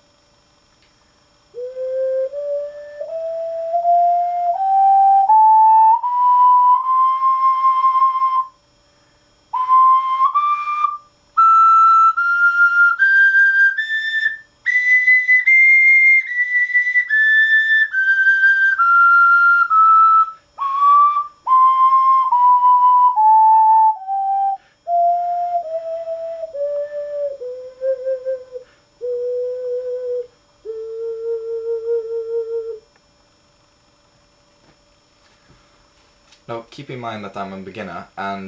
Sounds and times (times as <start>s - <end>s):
Whistle: 1.5s - 8.6s, 9.5s - 32.9s.